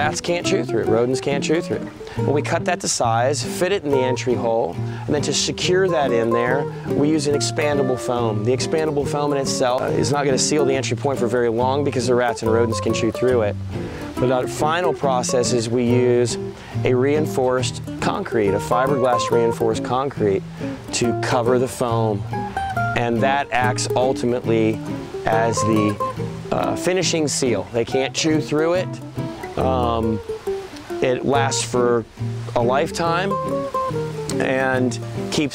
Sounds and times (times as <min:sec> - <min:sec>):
Speech: 0:00.0 - 0:13.6, 0:14.2 - 0:22.2, 0:23.0 - 0:29.0, 0:29.6 - 0:30.2, 0:31.0 - 0:33.4, 0:34.3 - 0:35.5
Music: 0:00.0 - 0:35.5.